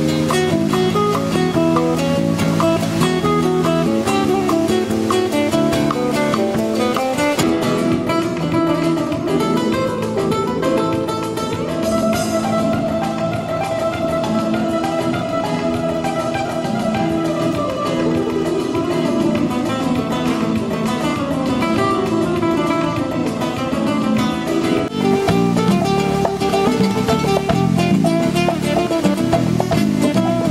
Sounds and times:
Acoustic guitar: 0:00.0 - 0:30.5
Bass guitar: 0:00.0 - 0:30.5
Drum: 0:00.0 - 0:30.5
Drum kit: 0:00.0 - 0:30.5
Strum: 0:00.0 - 0:30.5.

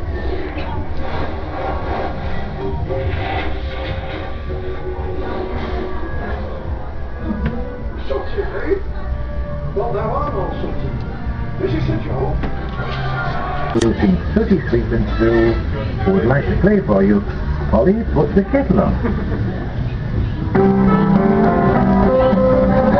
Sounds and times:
Inside, large room or hall: 0:00.0 - 0:22.9
Music: 0:00.0 - 0:22.9.

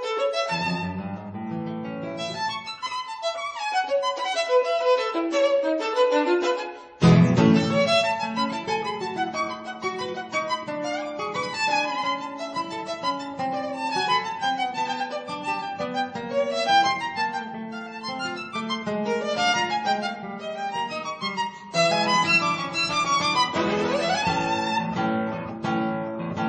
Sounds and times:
Guitar: 0:00.0 - 0:26.4.

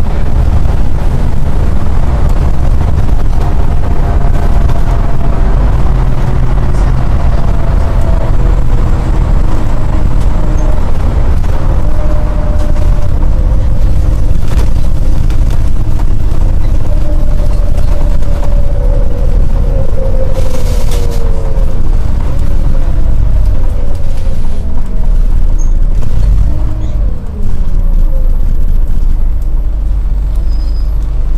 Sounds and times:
Bus: 0:00.0 - 0:31.3.

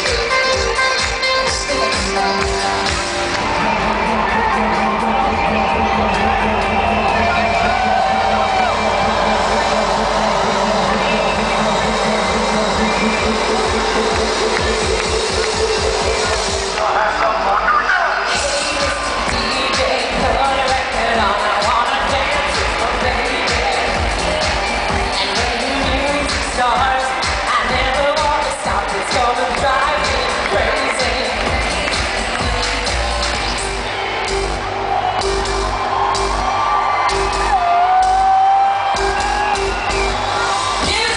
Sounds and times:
Music: 0:00.0 - 0:41.1.

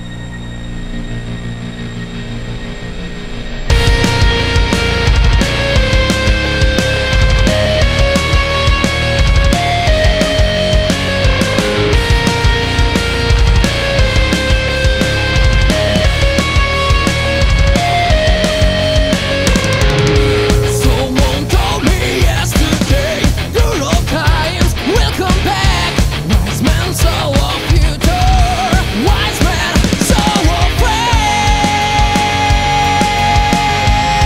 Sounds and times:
Exciting music: 0:00.0 - 0:34.2.

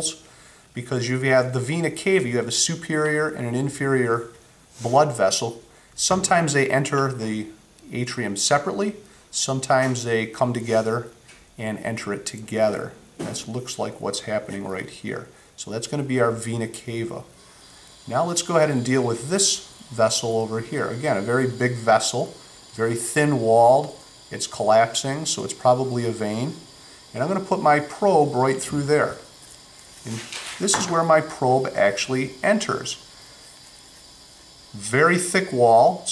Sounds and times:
Speech: 0:00.0 - 0:00.2, 0:00.8 - 0:17.3, 0:18.1 - 0:29.3, 0:30.0 - 0:33.0, 0:34.7 - 0:36.1.

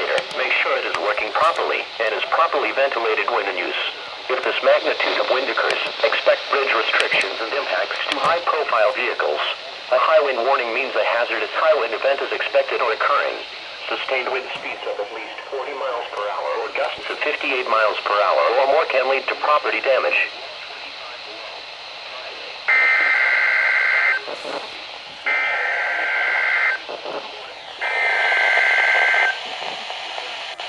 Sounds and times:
Speech: 0:00.0 - 0:23.3, 0:24.2 - 0:26.1, 0:26.8 - 0:27.7, 0:29.2 - 0:30.6.

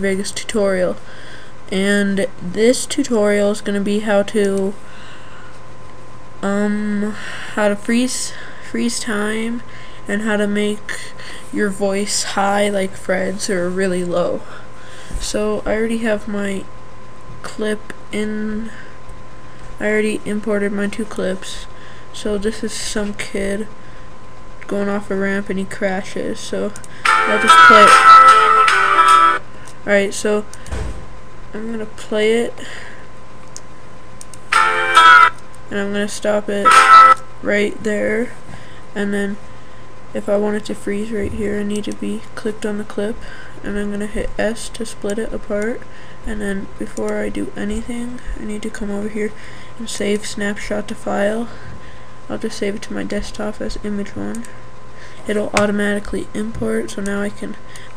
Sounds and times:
Speech: 0:00.0 - 0:01.0, 0:01.7 - 0:04.8, 0:06.4 - 0:16.7, 0:17.4 - 0:18.9, 0:19.8 - 0:23.8, 0:24.6 - 0:28.0, 0:29.8 - 0:30.5, 0:31.5 - 0:32.9, 0:35.7 - 0:36.7, 0:37.4 - 0:38.4, 0:39.0 - 0:39.4, 0:40.1 - 0:51.7, 0:52.3 - 0:54.6, 0:55.2 - 0:57.6
Music: 0:27.0 - 0:29.4, 0:34.5 - 0:35.3, 0:36.6 - 0:37.2.

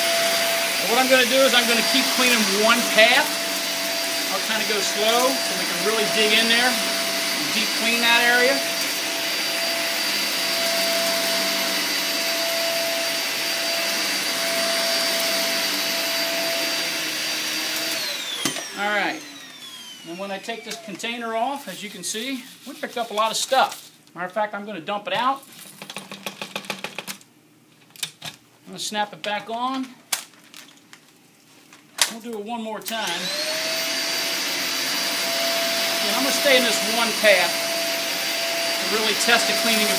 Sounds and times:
Vacuum cleaner: 0:00.0 - 0:23.1, 0:32.9 - 0:39.9
Speech: 0:00.8 - 0:03.4, 0:04.3 - 0:06.8, 0:07.4 - 0:08.7, 0:18.8 - 0:19.2, 0:20.1 - 0:25.4, 0:28.7 - 0:30.0, 0:32.0 - 0:33.3, 0:36.0 - 0:37.6, 0:38.8 - 0:39.9.

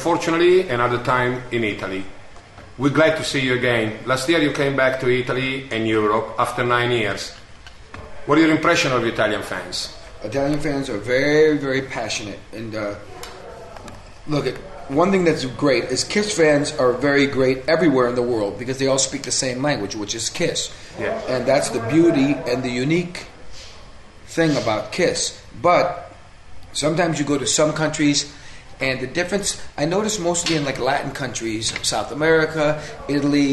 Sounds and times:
Speech: 0:02.8 - 0:07.4, 0:08.0 - 0:23.7, 0:24.3 - 0:26.2, 0:26.8 - 0:33.5.

